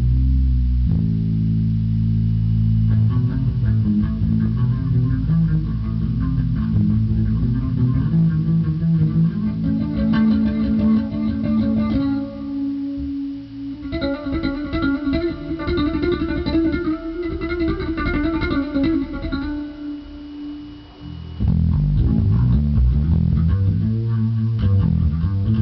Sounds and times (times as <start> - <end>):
Bass guitar: 0.0 - 25.6
Electric guitar: 0.0 - 25.6.